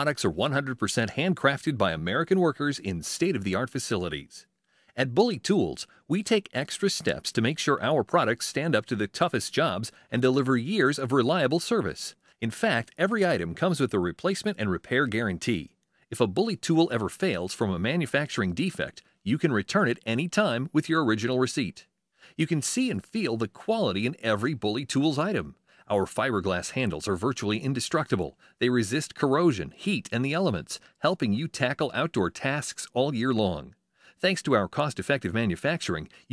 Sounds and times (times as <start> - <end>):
Speech: 0.0 - 36.3.